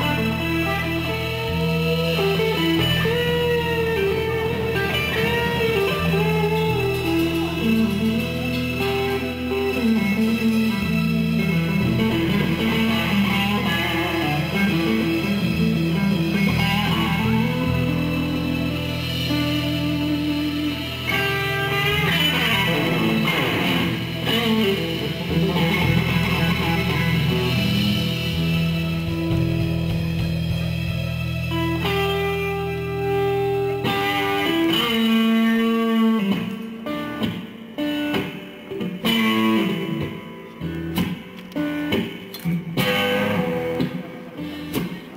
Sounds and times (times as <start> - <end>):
Electric guitar: 0.0 - 45.1
Strum: 0.0 - 45.1.